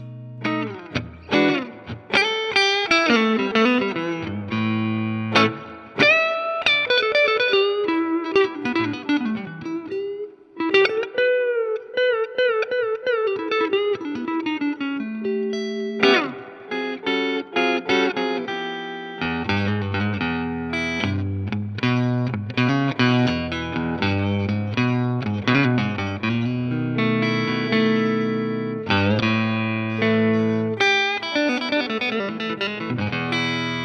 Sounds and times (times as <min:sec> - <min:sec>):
Effects unit: 0:00.0 - 0:33.8
Electric guitar: 0:00.0 - 0:33.8.